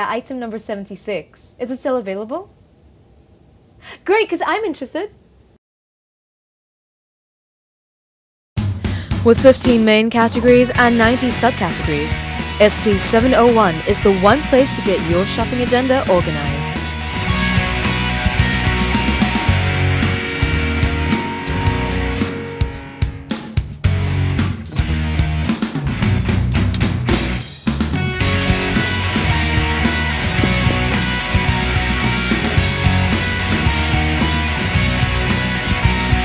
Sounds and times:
Speech: 0.0 - 2.5, 4.0 - 5.2, 9.2 - 16.8
Music: 8.6 - 36.2.

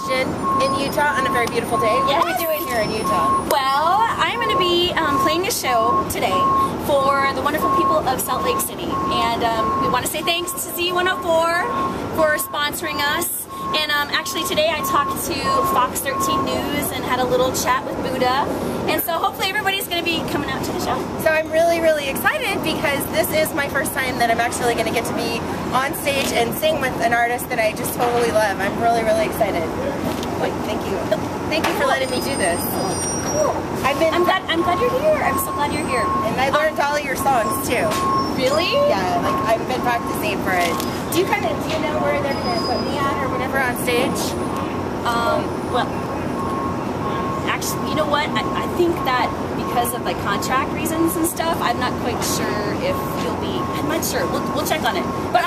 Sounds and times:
Speech: 0.0 - 44.4, 45.1 - 45.9, 47.5 - 55.4.

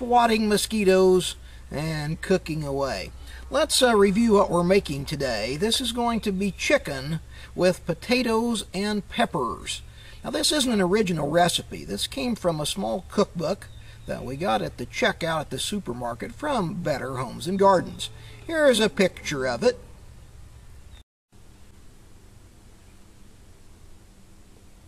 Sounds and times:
Speech: 0.0 - 19.8.

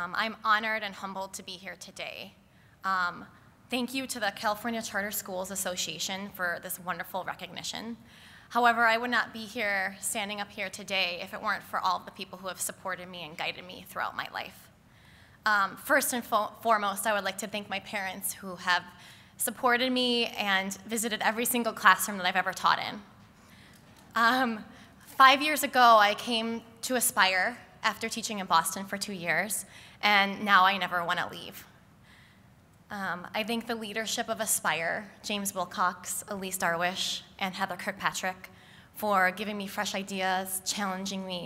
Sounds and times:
Female speech, woman speaking: 0.0 - 2.3, 2.9 - 8.0, 8.6 - 14.5, 15.5 - 18.8, 19.4 - 23.0, 24.2 - 24.6, 25.2 - 31.6, 32.9 - 38.4, 39.0 - 41.4.

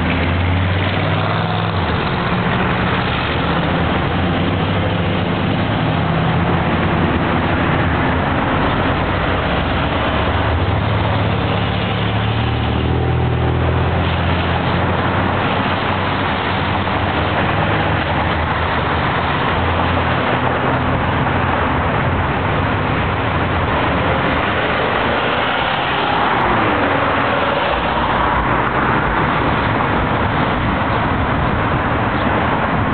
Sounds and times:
Traffic noise, roadway noise: 0.0 - 32.9.

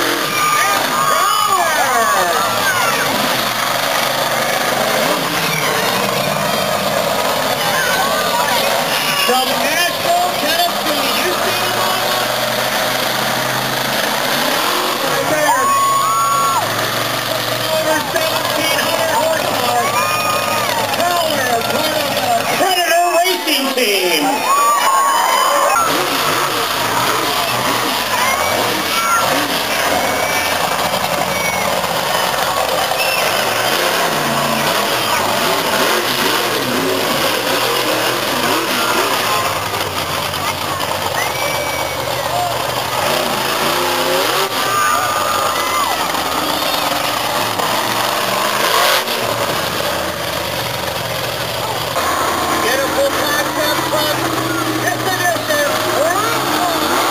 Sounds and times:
Truck: 0.0 - 57.1
Speech: 7.5 - 12.2, 17.6 - 24.6, 51.6 - 57.1.

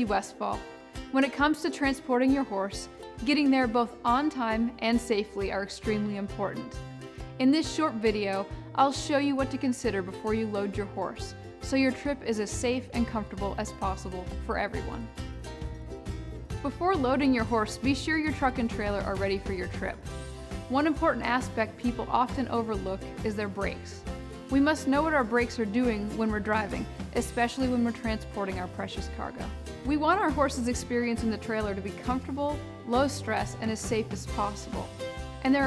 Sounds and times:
Speech: 0.0 - 0.6, 1.2 - 6.7, 7.4 - 15.1, 16.6 - 20.0, 20.7 - 35.6
Music: 0.0 - 35.6.

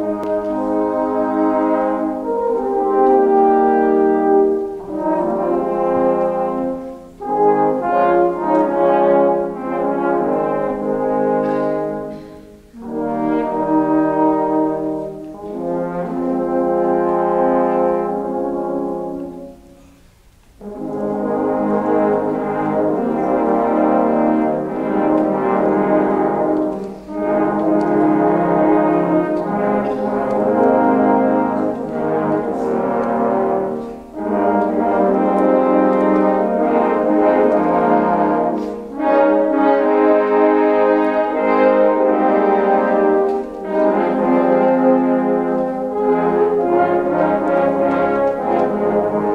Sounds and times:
Brass instrument: 0.0 - 49.3.

